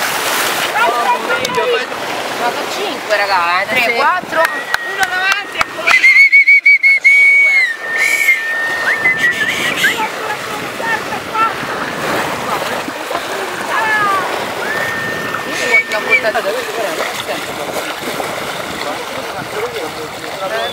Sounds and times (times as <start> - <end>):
Slosh: 0.0 - 1.2, 7.8 - 20.7
Boat, Water vehicle: 0.0 - 20.7
Ocean: 0.0 - 20.7.